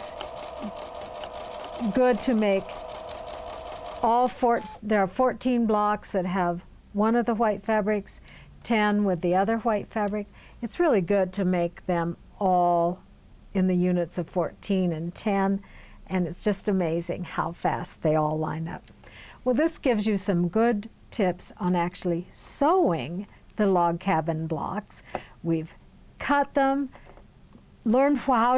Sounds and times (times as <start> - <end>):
Sewing machine: 0.0 - 4.8
Speech: 1.8 - 2.7, 4.0 - 13.0, 13.6 - 18.8, 19.5 - 26.9, 27.9 - 28.5.